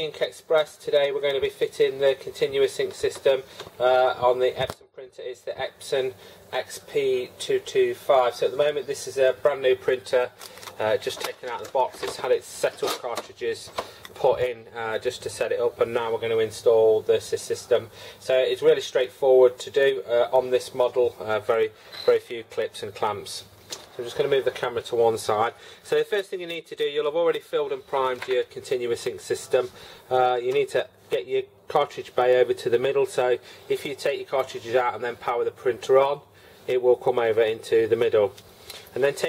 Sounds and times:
Speech: 0.0 - 39.2.

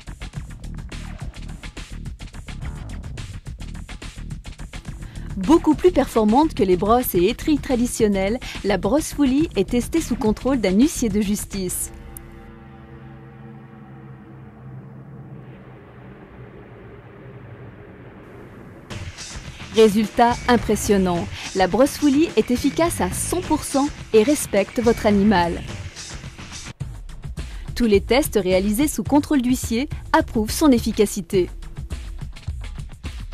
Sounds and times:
Music: 0.0 - 33.3
Speech: 5.3 - 11.9, 19.8 - 25.7, 27.8 - 31.5.

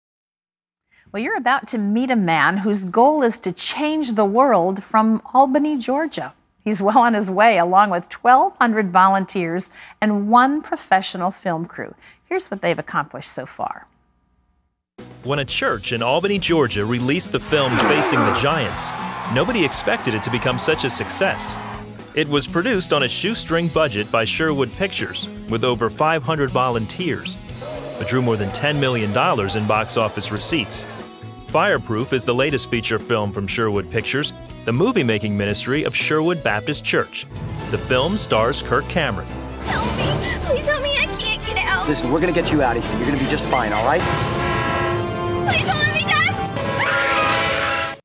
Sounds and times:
Speech: 1.2 - 13.8, 15.2 - 21.5, 22.2 - 27.4, 28.0 - 30.8, 31.5 - 37.2, 37.8 - 40.4, 41.7 - 44.0.

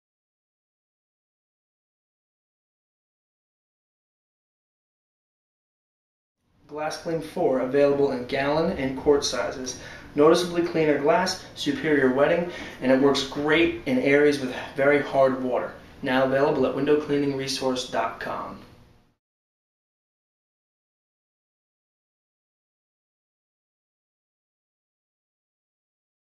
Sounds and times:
Speech: 6.7 - 18.7.

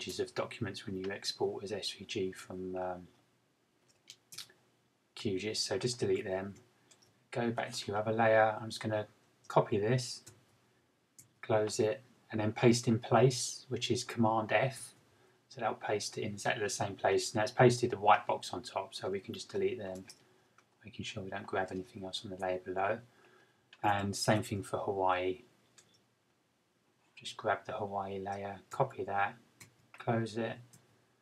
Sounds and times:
Speech: 0.0 - 3.1, 5.2 - 6.6, 7.4 - 10.3, 11.4 - 20.1, 20.8 - 23.1, 23.8 - 25.5, 27.2 - 29.4, 30.0 - 30.7.

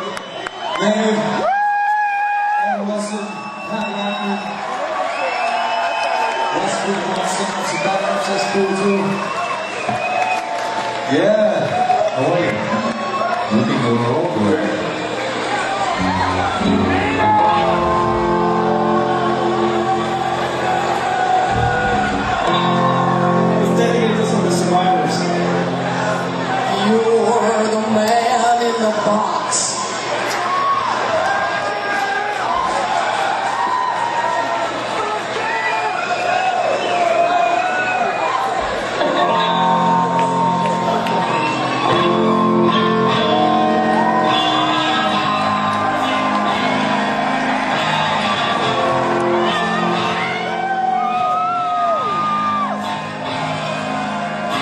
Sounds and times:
Music: 15.8 - 28.8, 38.6 - 54.6.

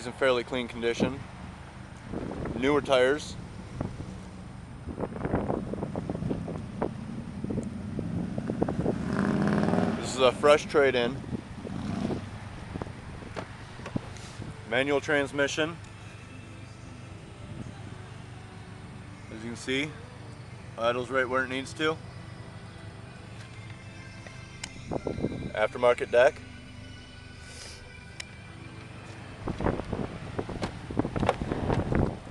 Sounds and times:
Speech: 0.0 - 1.2, 10.0 - 11.2, 14.7 - 15.8, 20.8 - 22.0, 25.5 - 26.4
Music: 14.7 - 32.3.

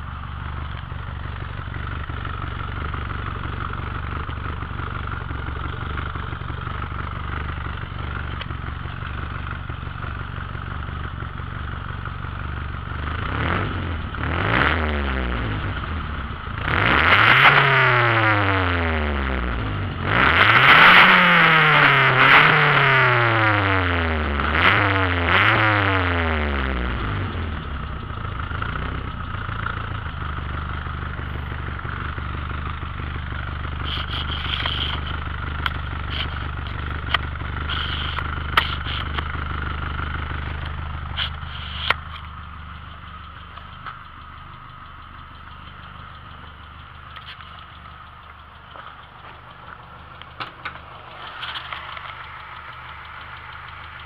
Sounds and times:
Car: 0.0 - 54.0.

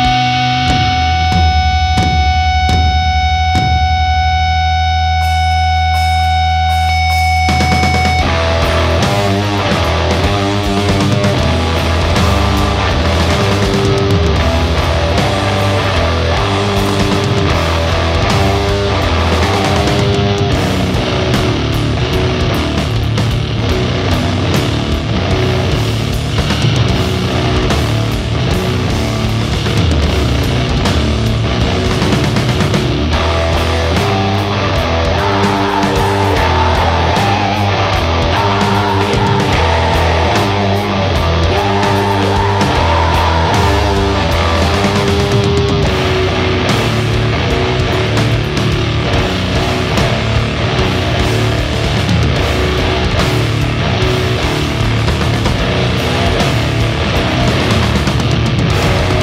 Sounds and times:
Music: 0.0 - 59.2.

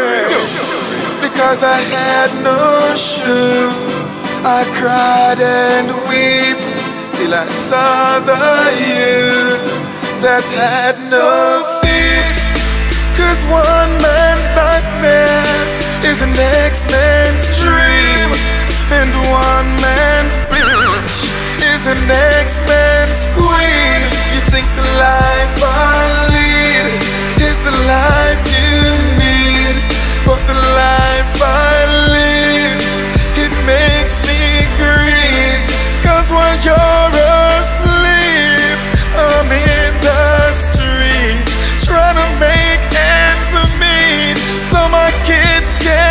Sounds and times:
Music: 0.0 - 46.1.

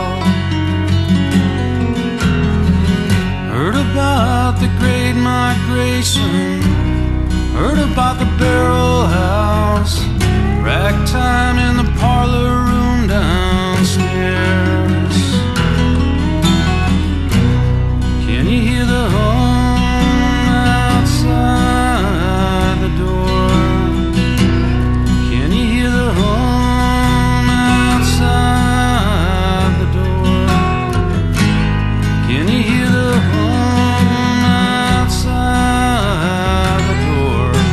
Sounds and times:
Music: 0.0 - 37.7.

